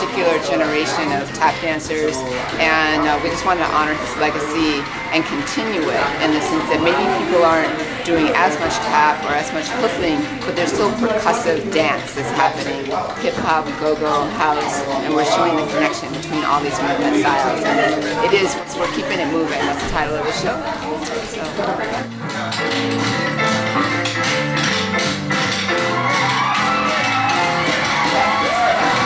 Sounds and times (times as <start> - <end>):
Speech: 0.0 - 22.1
Music: 0.0 - 29.0.